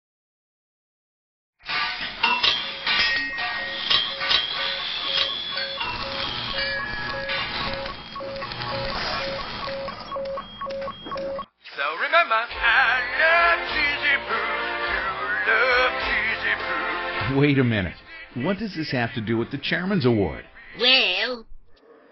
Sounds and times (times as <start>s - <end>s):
Music: 1.6s - 6.9s, 11.8s - 20.8s
Beep, bleep: 7.1s - 11.5s
Speech: 17.2s - 21.4s.